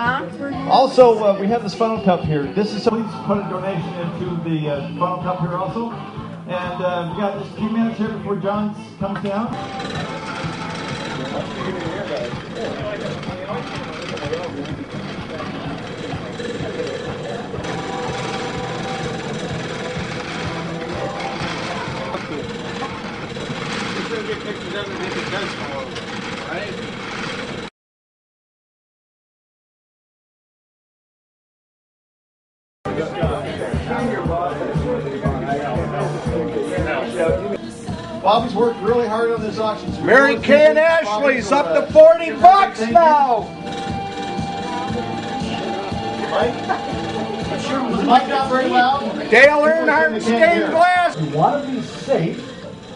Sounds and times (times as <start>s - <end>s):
Music: 0.0s - 27.6s, 32.9s - 52.9s.